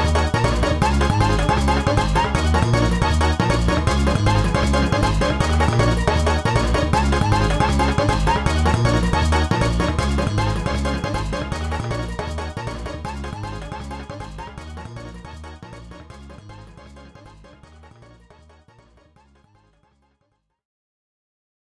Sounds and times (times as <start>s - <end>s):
Video game music: 0.0s - 20.4s.